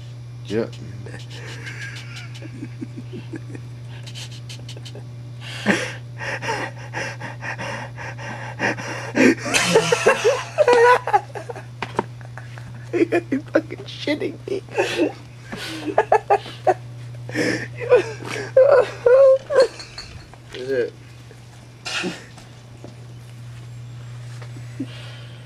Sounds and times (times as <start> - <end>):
Speech: 0.4 - 1.6, 13.0 - 14.7.